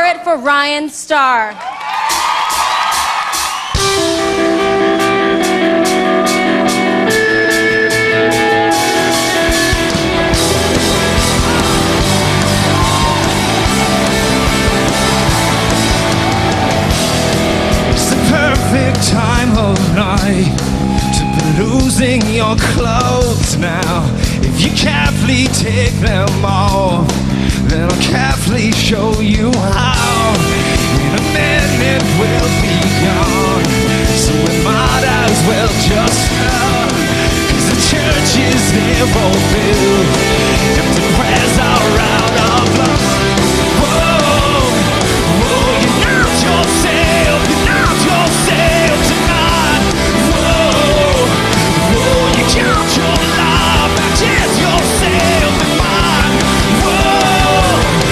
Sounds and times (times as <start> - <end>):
Music: 2.0 - 58.1.